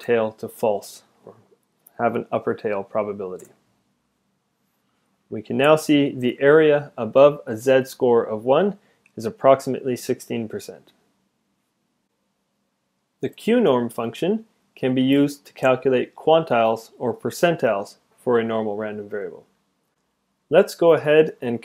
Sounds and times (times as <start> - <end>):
Speech: 0.0 - 3.6, 5.3 - 11.0, 13.2 - 19.5, 20.5 - 21.6.